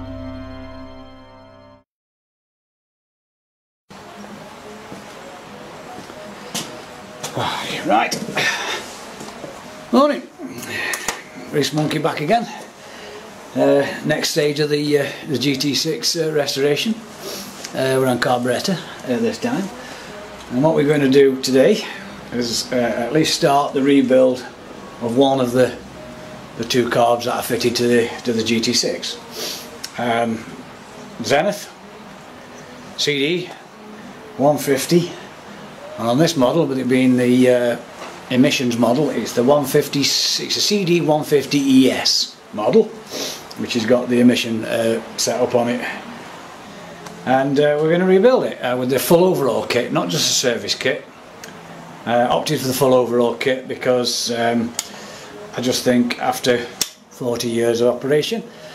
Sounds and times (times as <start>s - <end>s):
Speech: 7.4s - 8.4s, 9.9s - 10.3s, 11.5s - 12.7s, 13.6s - 17.0s, 17.7s - 25.8s, 26.6s - 29.2s, 29.9s - 30.5s, 31.2s - 31.8s, 33.0s - 33.7s, 34.4s - 35.2s, 35.9s - 43.0s, 43.6s - 46.1s, 47.2s - 51.1s, 52.1s - 54.8s, 55.5s - 58.5s.